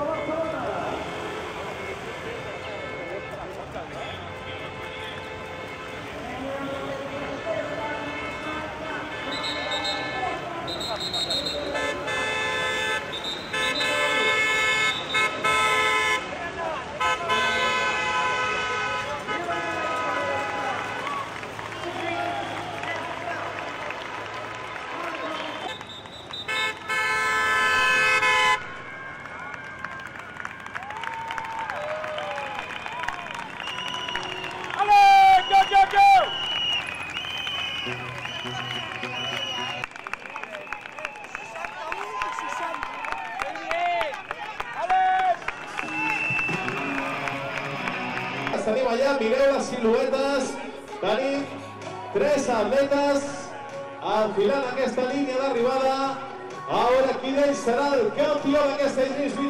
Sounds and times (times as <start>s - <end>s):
Outside, urban or manmade: 0.0s - 59.5s.